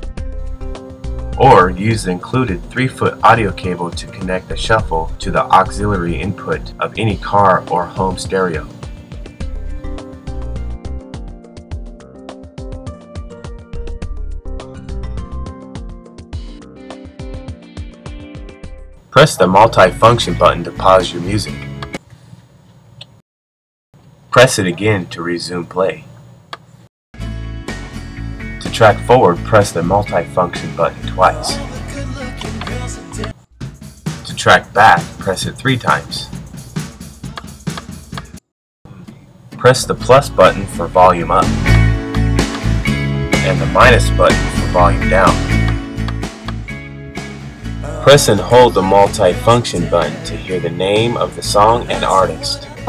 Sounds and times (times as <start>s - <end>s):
Music: 0.0s - 22.1s, 27.2s - 52.8s
Speech: 1.4s - 8.7s, 19.2s - 21.6s, 24.4s - 26.1s, 28.6s - 31.8s, 34.2s - 36.3s, 38.9s - 41.6s, 43.4s - 45.5s, 47.8s - 52.8s.